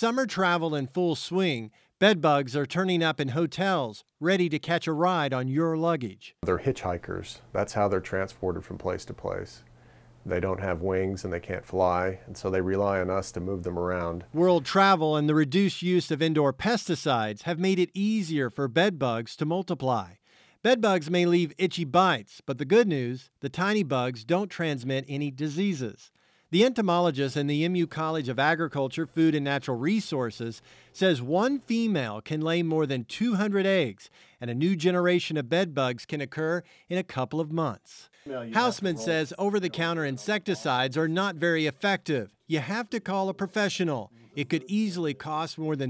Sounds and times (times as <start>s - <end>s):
Speech: 0.0s - 45.9s.